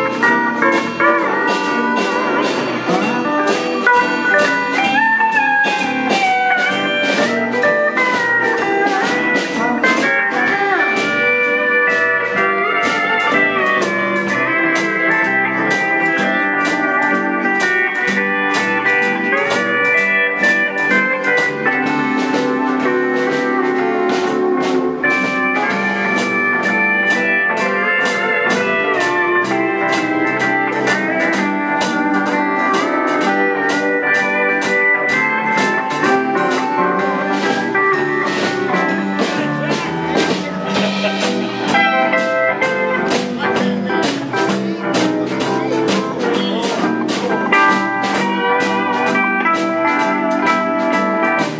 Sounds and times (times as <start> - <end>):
Guitar: 0.0 - 51.5.